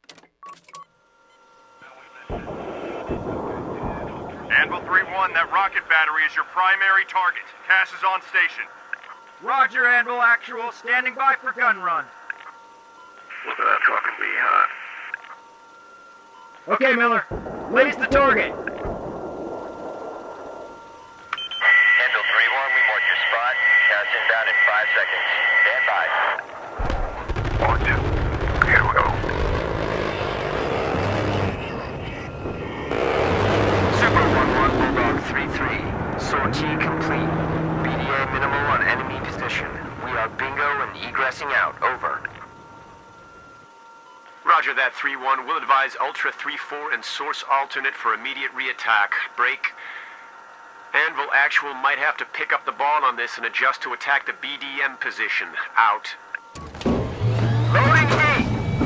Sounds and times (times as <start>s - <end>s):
Radio: 1.6s - 19.2s, 20.1s - 56.5s, 57.6s - 58.8s
Speech: 1.8s - 8.7s, 9.4s - 12.1s, 13.4s - 14.8s, 16.6s - 18.6s, 21.6s - 26.4s, 27.6s - 28.0s, 28.6s - 29.3s, 33.9s - 42.4s, 44.4s - 49.8s, 51.0s - 56.3s, 57.8s - 58.5s.